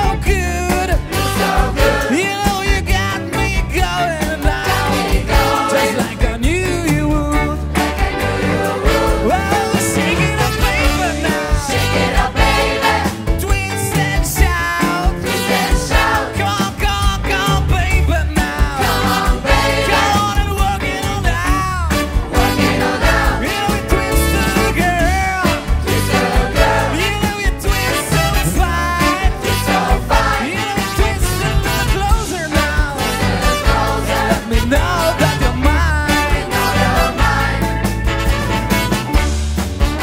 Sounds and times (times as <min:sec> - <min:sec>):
Music: 0:00.0 - 0:40.0.